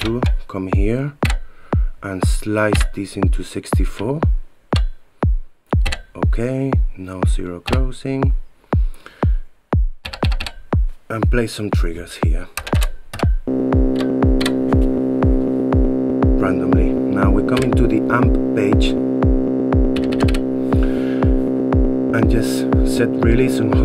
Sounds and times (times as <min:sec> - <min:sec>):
Speech: 0:00.0 - 0:01.2, 0:02.0 - 0:04.3, 0:06.1 - 0:08.4, 0:11.1 - 0:12.6, 0:16.4 - 0:19.0, 0:22.1 - 0:23.8
Sampler: 0:09.8 - 0:23.8.